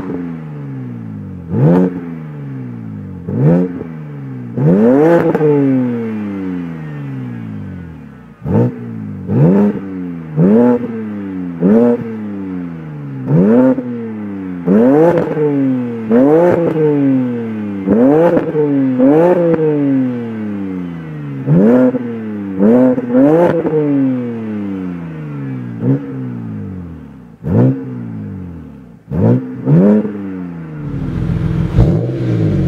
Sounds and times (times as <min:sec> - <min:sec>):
Car: 0:00.0 - 0:32.6
Accelerating, revving, vroom: 0:01.5 - 0:02.2, 0:03.3 - 0:03.9, 0:04.5 - 0:07.4, 0:08.4 - 0:12.2, 0:13.2 - 0:13.9, 0:14.6 - 0:20.2, 0:21.4 - 0:26.4, 0:27.4 - 0:28.1, 0:29.1 - 0:32.6.